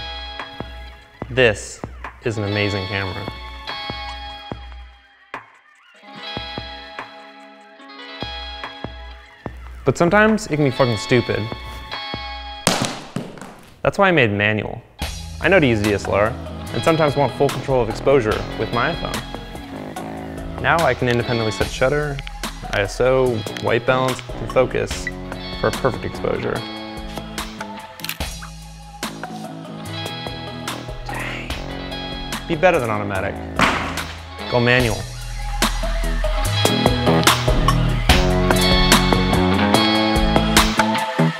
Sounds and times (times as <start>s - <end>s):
Music: 0.0s - 12.7s, 14.6s - 41.3s
Speech: 1.3s - 3.3s, 9.9s - 11.5s, 13.8s - 14.8s, 15.4s - 19.2s, 20.6s - 26.6s, 32.5s - 33.4s, 34.5s - 35.1s.